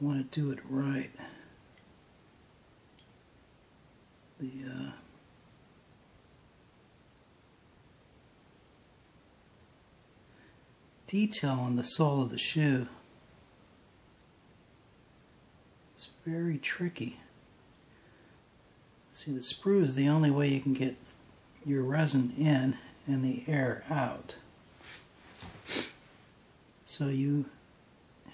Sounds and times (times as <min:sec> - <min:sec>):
Speech: 0:00.0 - 0:01.4, 0:04.4 - 0:05.1, 0:11.1 - 0:13.0, 0:16.0 - 0:17.3, 0:19.1 - 0:24.4, 0:26.8 - 0:27.6
Inside, small room: 0:00.0 - 0:28.3.